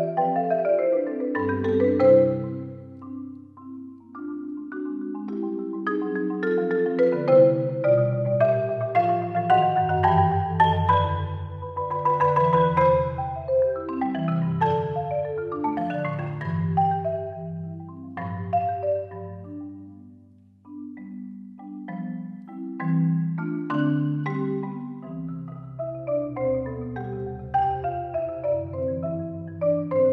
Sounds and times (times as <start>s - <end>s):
Glockenspiel: 0.0s - 30.1s
Marimba, xylophone: 0.0s - 30.1s.